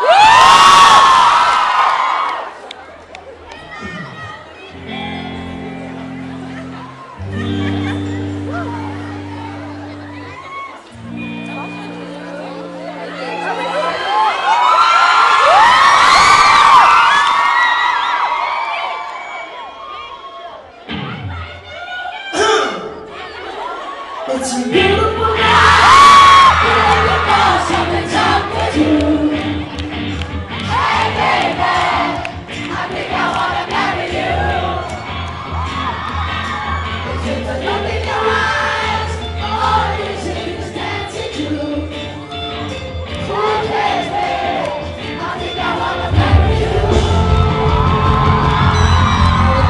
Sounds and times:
Music: 3.8 - 14.8, 20.8 - 23.6, 24.3 - 49.7
Singing: 24.3 - 30.1, 37.0 - 42.4, 43.2 - 49.7.

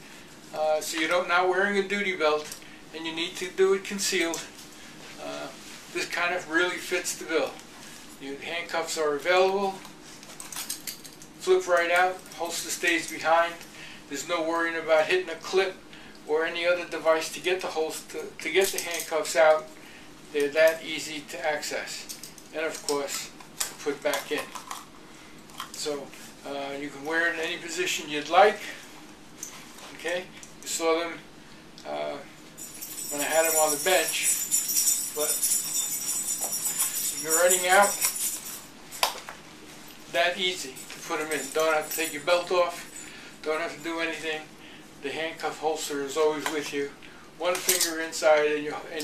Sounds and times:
Inside, small room: 0.0 - 49.0
Speech: 0.5 - 4.5, 5.2 - 7.6, 8.2 - 9.9, 11.4 - 19.7, 20.3 - 24.5, 25.8 - 28.8, 29.9 - 31.2, 31.8 - 32.3, 33.1 - 34.3, 35.2 - 35.4, 37.2 - 38.0, 40.1 - 49.0.

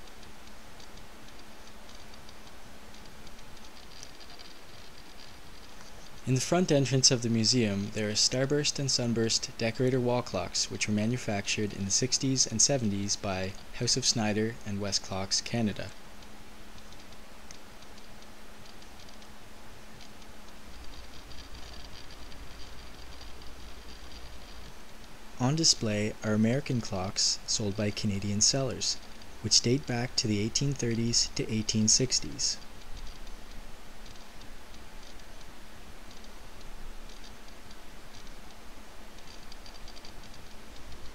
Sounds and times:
Speech: 6.2 - 16.0, 25.4 - 32.6.

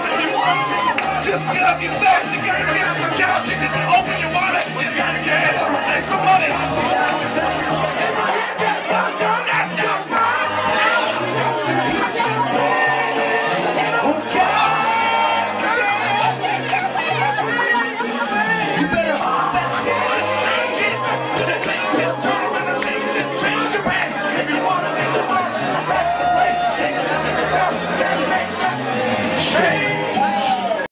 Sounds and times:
Male singing: 0.0 - 16.5, 17.5 - 30.9
Music: 0.0 - 30.9.

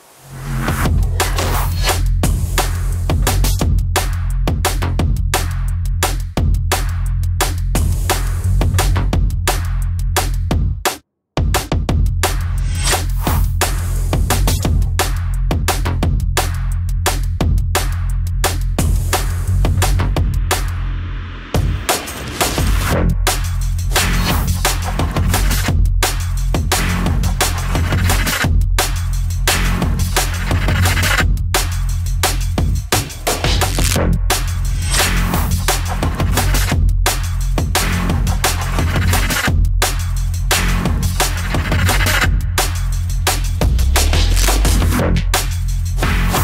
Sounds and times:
Drum and bass: 0.0 - 46.4.

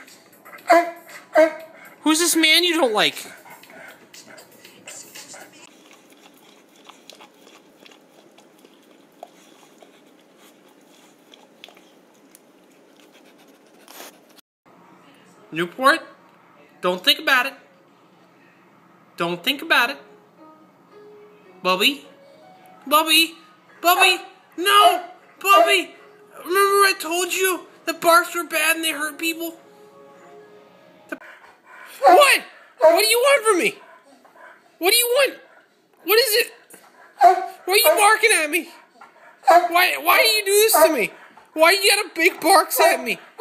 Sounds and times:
Music: 0.0 - 2.4, 3.2 - 5.7, 19.8 - 31.2
Speech: 22.9 - 29.6, 37.7 - 38.8, 39.6 - 43.2.

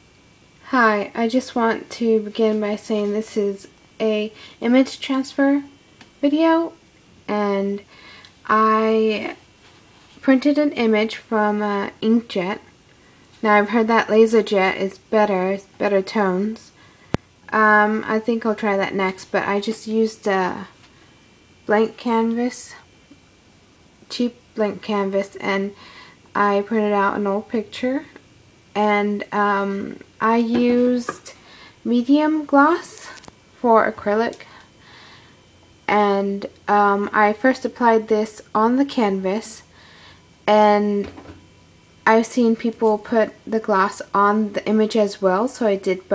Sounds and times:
Speech: 0.7 - 7.9, 8.5 - 9.4, 10.2 - 12.7, 13.4 - 16.8, 17.5 - 20.8, 21.7 - 22.9, 24.1 - 25.8, 26.4 - 28.2, 28.8 - 34.5, 35.9 - 39.7, 40.5 - 41.2, 42.1 - 46.1.

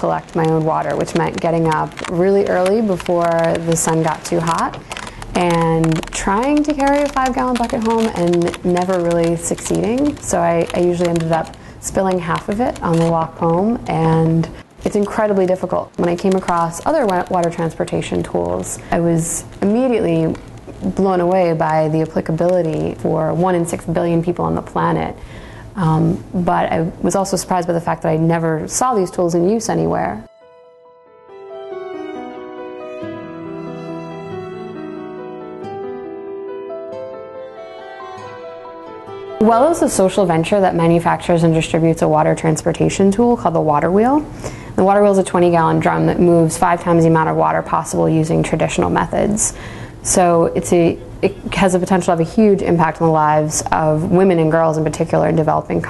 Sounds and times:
Speech: 0.0 - 4.8, 5.4 - 25.2, 25.8 - 30.3, 39.4 - 55.8.

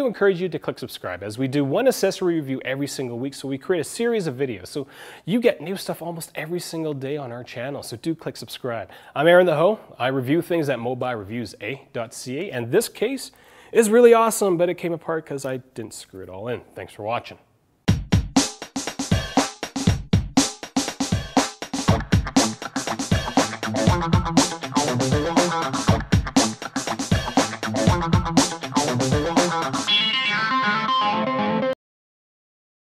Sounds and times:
Distortion: 13.9 - 31.8
Music: 17.9 - 31.8
Effects unit: 21.2 - 31.8.

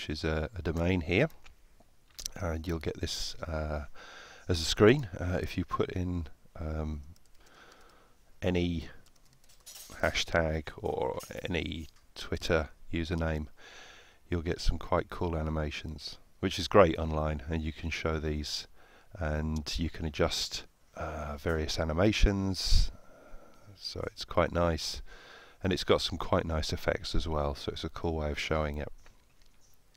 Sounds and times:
Speech: 0.0 - 1.4, 2.2 - 3.9, 4.5 - 7.1, 8.4 - 9.0, 9.9 - 13.5, 14.3 - 23.0, 23.7 - 29.0.

